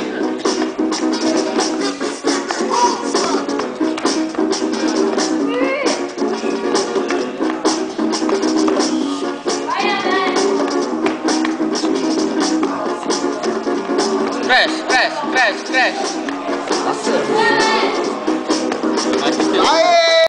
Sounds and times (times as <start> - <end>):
Music: 0.0 - 20.2.